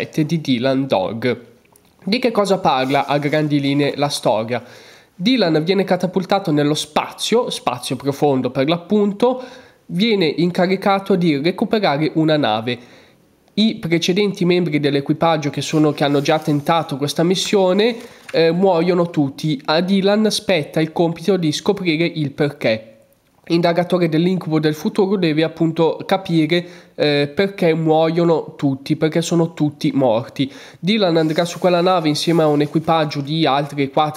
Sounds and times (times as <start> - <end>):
Speech: 0.0 - 12.8, 13.6 - 34.1.